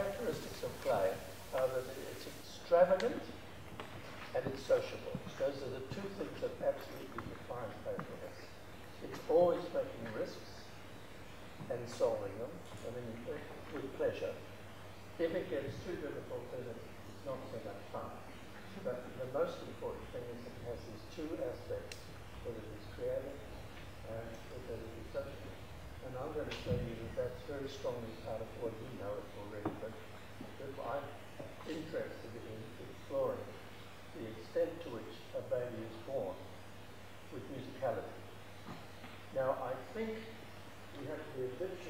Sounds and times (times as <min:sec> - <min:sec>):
Male speech, man speaking: 0:00.0 - 0:03.4, 0:04.3 - 0:10.8, 0:11.7 - 0:14.4, 0:15.2 - 0:30.0, 0:30.6 - 0:33.6, 0:34.2 - 0:36.5, 0:37.3 - 0:38.2, 0:39.3 - 0:40.4, 0:41.0 - 0:41.9
Narration, monologue: 0:00.0 - 0:41.9.